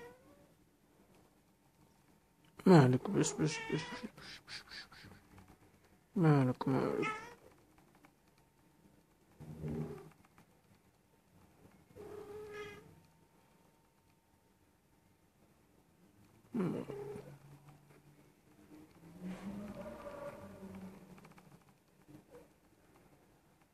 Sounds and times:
Cat: 0.0s - 0.5s, 3.2s - 5.5s, 6.8s - 7.6s, 9.5s - 10.2s, 11.8s - 13.0s, 16.5s - 17.4s, 22.1s - 22.6s.

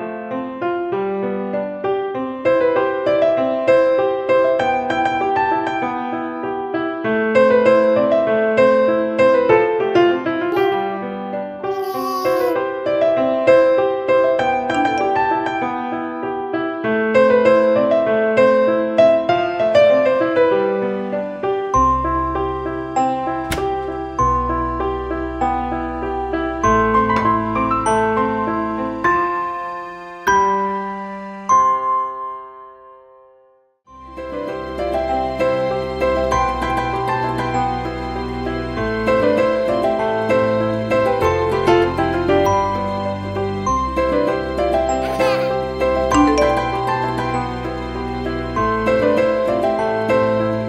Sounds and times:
Music: 0.0s - 50.6s.

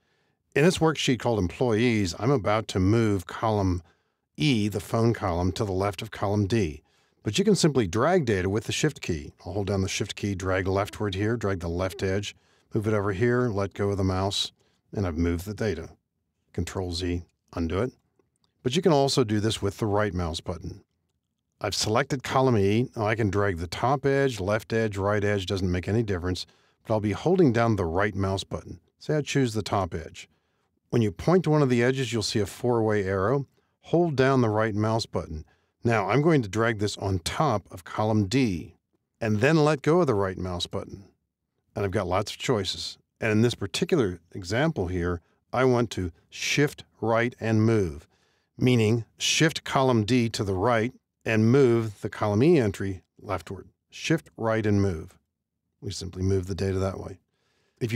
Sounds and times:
Speech: 0.6s - 18.0s, 18.6s - 20.9s, 21.6s - 30.3s, 30.9s - 41.2s, 41.8s - 55.2s, 55.8s - 57.2s.

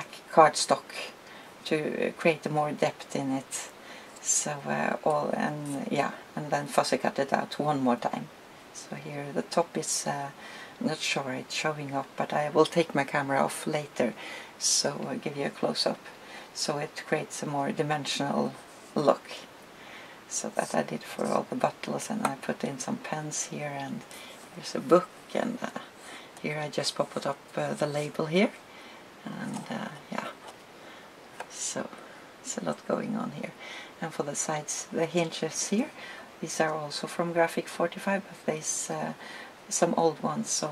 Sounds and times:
Speech: 0.0s - 19.5s, 20.3s - 28.6s, 29.2s - 30.4s, 31.4s - 40.7s
Inside, small room: 0.0s - 40.7s.

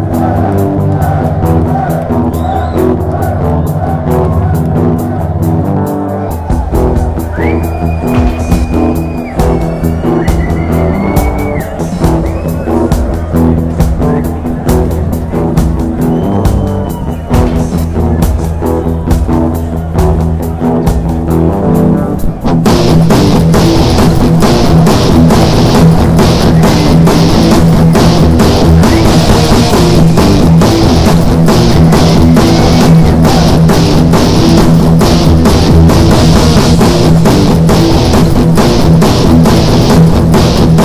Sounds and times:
Hubbub, speech noise, speech babble: 0.0s - 22.5s
Music: 0.0s - 40.8s.

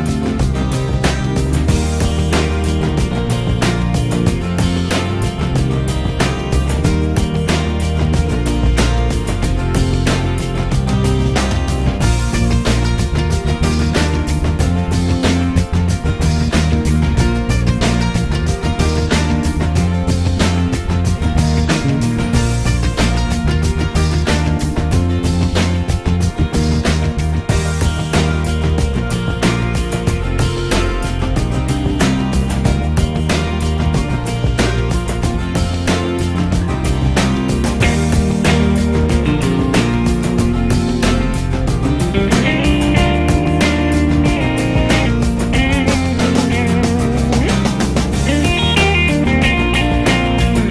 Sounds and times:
Music: 0.0s - 50.7s.

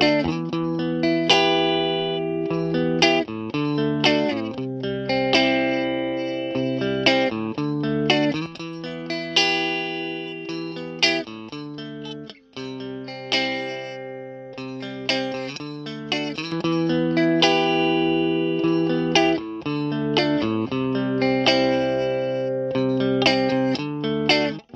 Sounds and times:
Distortion: 0.0s - 24.7s
Effects unit: 0.0s - 24.7s
Guitar: 0.0s - 24.7s.

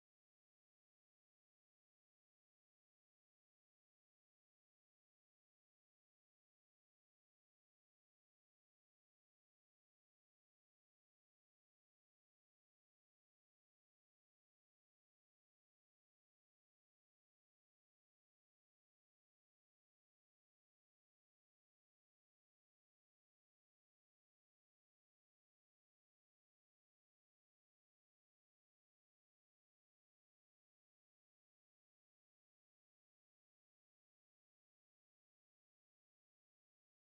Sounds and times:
Music: 0.0s - 37.0s.

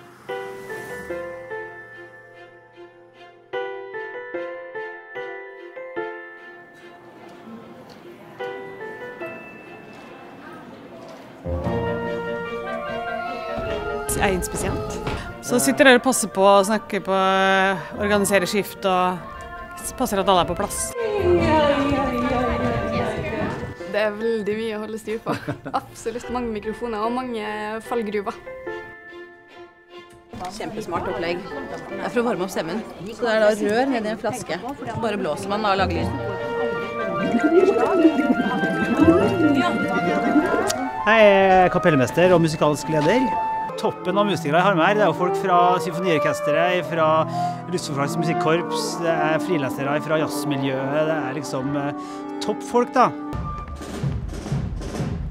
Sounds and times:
Music: 0.0s - 55.3s.

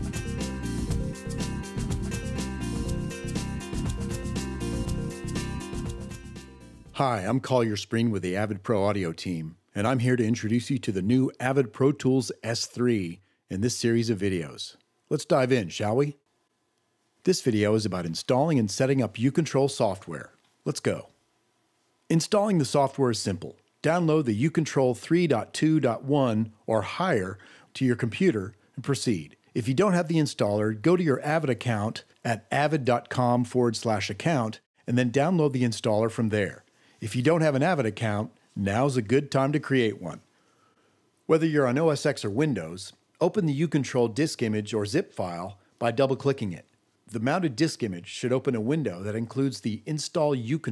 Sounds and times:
Speech: 7.0s - 16.2s, 17.2s - 21.1s, 22.1s - 40.3s, 41.3s - 50.7s.

